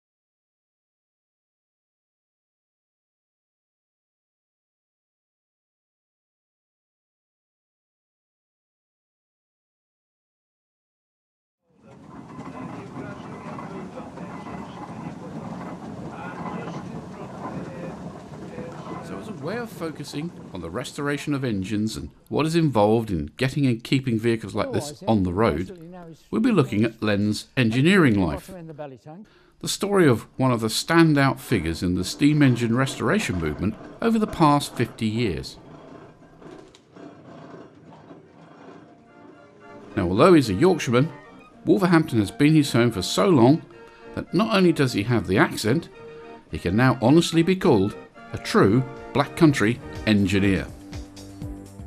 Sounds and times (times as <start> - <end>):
Speech: 11.8 - 15.4, 16.1 - 35.6, 40.0 - 45.9, 46.5 - 50.8.